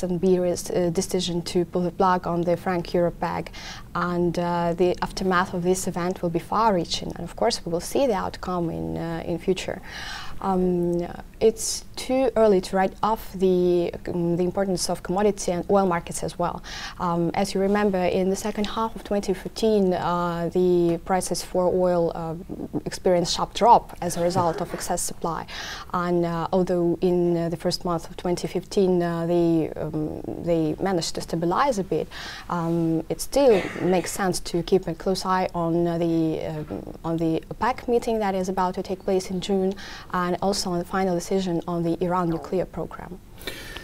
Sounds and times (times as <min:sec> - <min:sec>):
Speech: 0:00.0 - 0:09.8, 0:10.4 - 0:43.2.